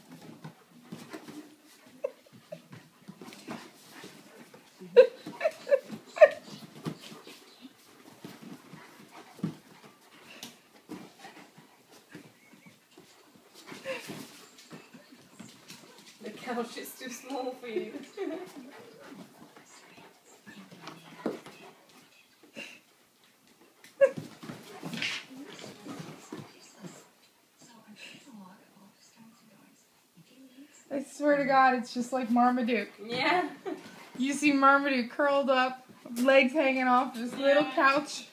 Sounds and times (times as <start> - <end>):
Speech: 34.2 - 38.3.